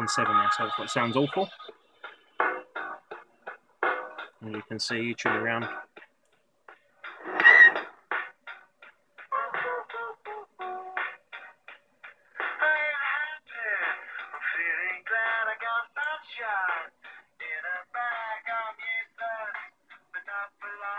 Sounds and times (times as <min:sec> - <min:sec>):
Music: 0:00.0 - 0:20.9.